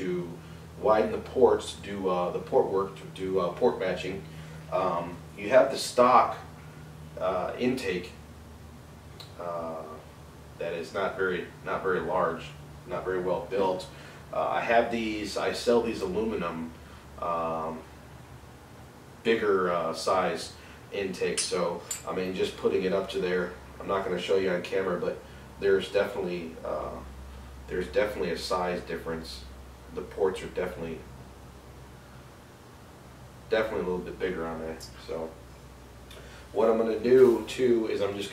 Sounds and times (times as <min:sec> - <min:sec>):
Speech: 0:00.0 - 0:06.5, 0:07.2 - 0:08.2, 0:09.2 - 0:10.0, 0:10.6 - 0:17.9, 0:19.2 - 0:27.1, 0:27.7 - 0:31.1, 0:33.5 - 0:35.4, 0:36.6 - 0:38.3.